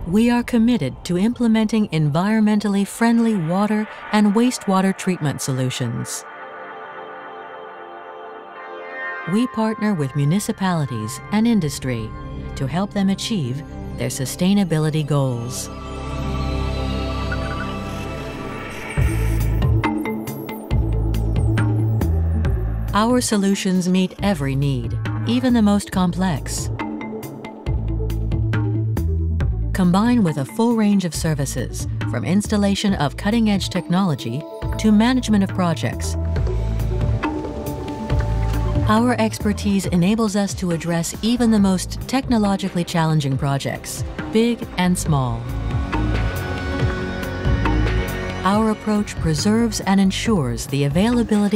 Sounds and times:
Speech: 0.0 - 6.2, 9.3 - 15.7, 23.0 - 26.7, 29.8 - 36.2, 38.9 - 45.5, 48.4 - 51.5
Music: 0.0 - 51.5.

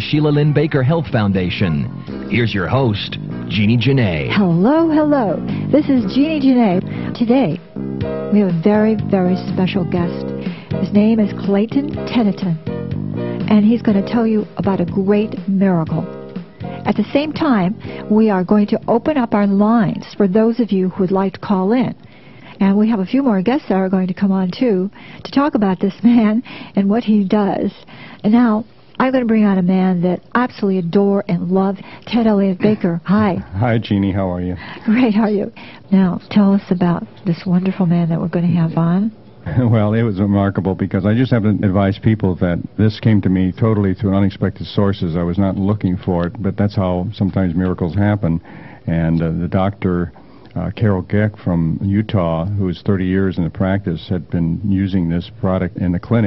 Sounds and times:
Speech: 0.0 - 7.6, 8.3 - 10.2, 10.8 - 12.6, 13.5 - 16.1, 16.9 - 22.0, 22.6 - 56.2.

